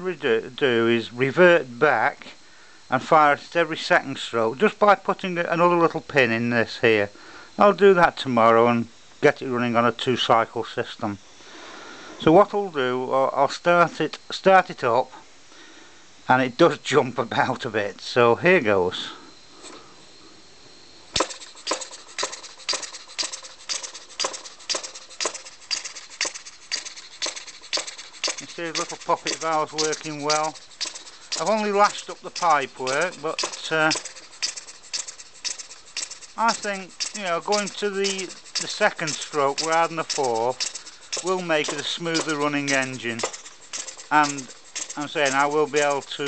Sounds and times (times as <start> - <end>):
Speech: 0.0 - 11.2, 12.2 - 15.2, 16.3 - 19.2, 28.4 - 30.6, 31.4 - 34.0, 36.4 - 40.6, 41.2 - 43.3, 44.1 - 46.2.